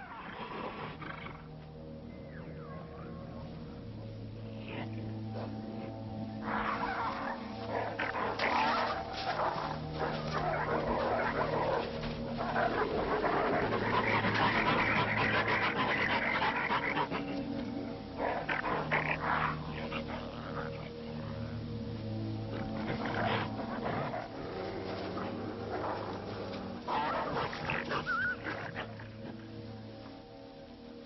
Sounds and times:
Wild animals: 0:00.0 - 0:31.0.

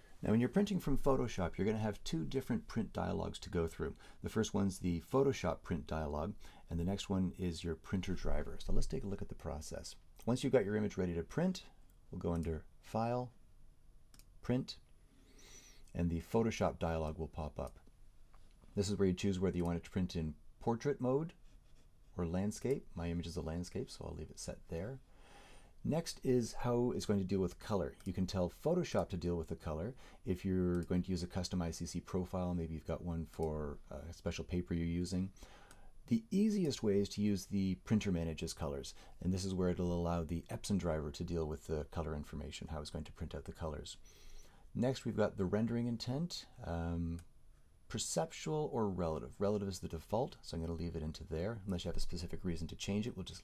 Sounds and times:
Speech: 0:00.2 - 0:13.4, 0:14.4 - 0:14.9, 0:15.9 - 0:17.9, 0:18.8 - 0:21.4, 0:22.1 - 0:25.0, 0:25.8 - 0:35.4, 0:36.1 - 0:44.0, 0:44.8 - 0:47.3, 0:47.9 - 0:53.4.

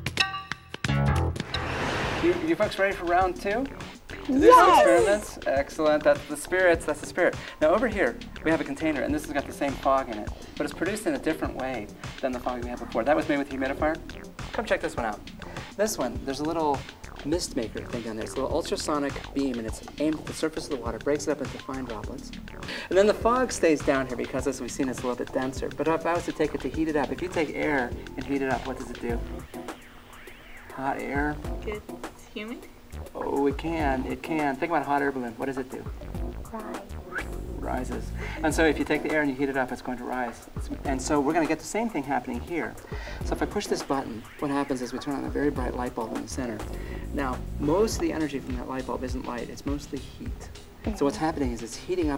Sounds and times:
Music: 0:00.0 - 0:52.1
Speech: 0:02.2 - 0:03.7, 0:04.3 - 0:14.0, 0:15.8 - 0:22.2, 0:22.9 - 0:29.2, 0:37.6 - 0:46.6, 0:47.2 - 0:52.1.

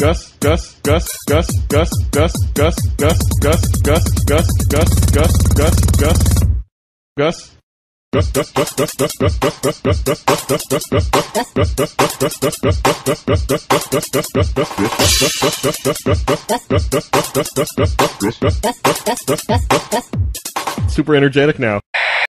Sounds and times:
Music: 0:00.0 - 0:06.5, 0:08.3 - 0:21.0
Speech: 0:07.2 - 0:07.6, 0:20.9 - 0:21.8.

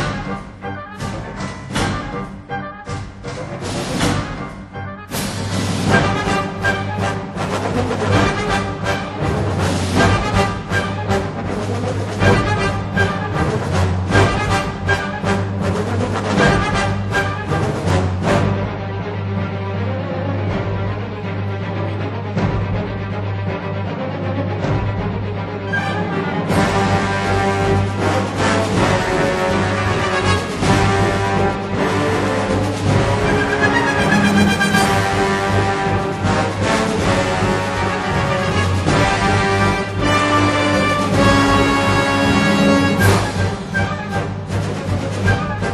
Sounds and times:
Music: 0:00.0 - 0:45.7.

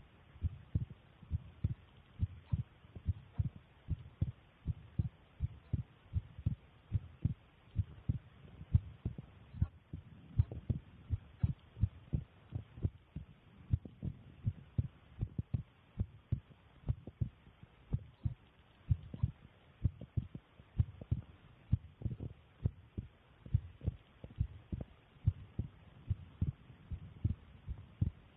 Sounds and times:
Heart sounds, heartbeat: 0:00.4 - 0:28.2.

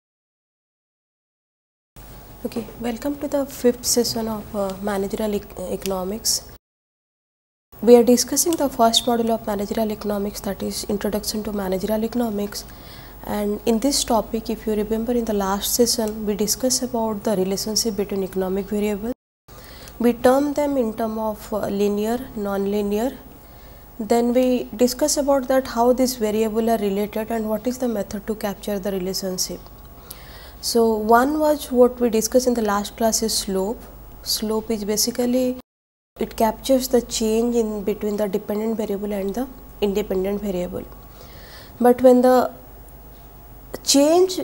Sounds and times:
Speech: 0:02.4 - 0:06.6, 0:07.8 - 0:12.6, 0:13.2 - 0:19.2, 0:20.0 - 0:23.2, 0:24.0 - 0:29.6, 0:30.6 - 0:35.6, 0:36.2 - 0:40.9, 0:41.8 - 0:42.6, 0:43.8 - 0:44.4.

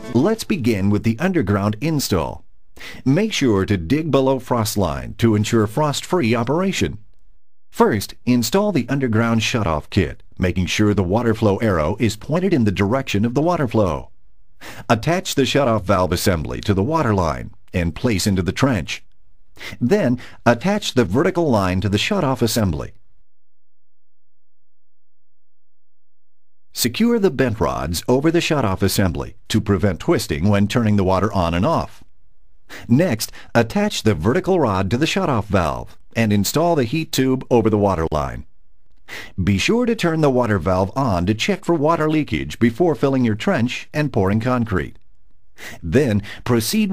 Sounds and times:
Speech: 0:00.0 - 0:02.4, 0:03.0 - 0:07.0, 0:07.8 - 0:14.1, 0:14.8 - 0:19.1, 0:19.7 - 0:23.0, 0:26.8 - 0:32.0, 0:32.8 - 0:38.5, 0:39.4 - 0:45.0, 0:45.8 - 0:46.9.

